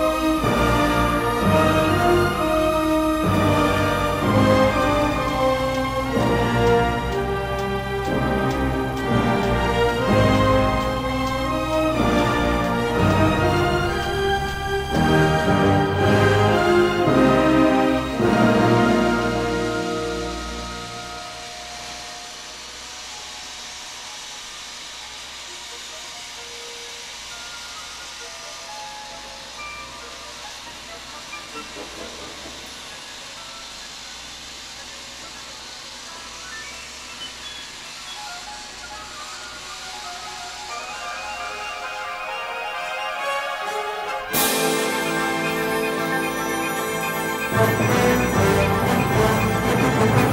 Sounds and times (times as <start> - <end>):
Music: 0.0 - 50.3.